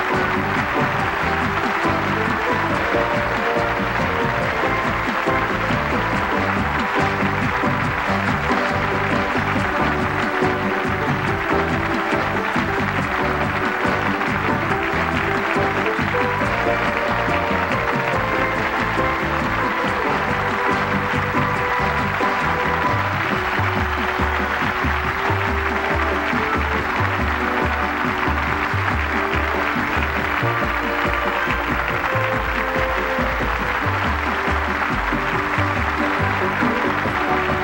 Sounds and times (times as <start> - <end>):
Music: 0.0 - 37.6.